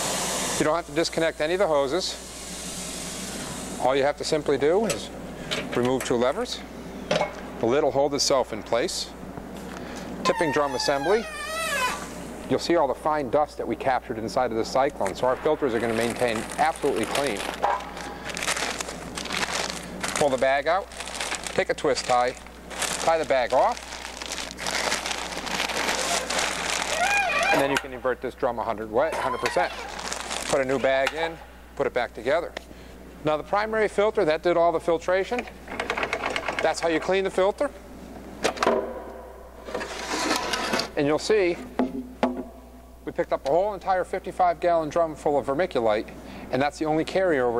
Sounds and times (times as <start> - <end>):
Speech: 0.6 - 2.2, 3.8 - 6.7, 7.6 - 9.2, 10.3 - 11.3, 12.5 - 17.5, 20.2 - 20.9, 21.6 - 22.4, 23.0 - 23.8, 27.5 - 29.9, 30.5 - 32.6, 33.2 - 35.5, 36.6 - 37.8, 41.0 - 41.7, 43.0 - 47.5.